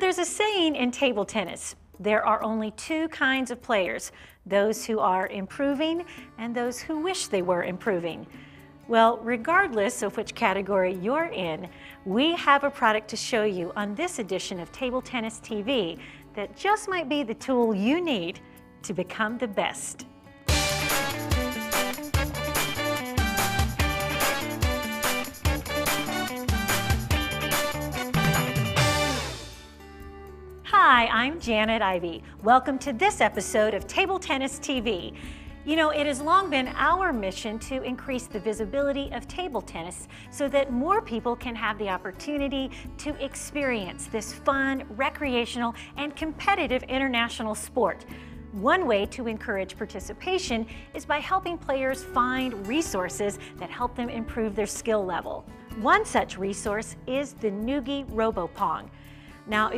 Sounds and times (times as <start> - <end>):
Speech: 0.0 - 8.3, 8.9 - 20.0, 30.7 - 35.1, 35.7 - 48.0, 48.6 - 58.9, 59.5 - 59.7
Music: 0.0 - 59.7.